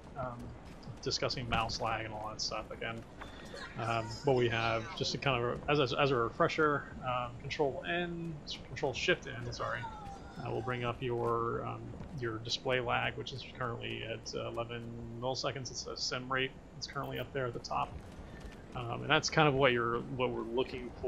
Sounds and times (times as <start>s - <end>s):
Speech: 0.2s - 3.0s, 3.6s - 17.9s, 18.8s - 21.0s.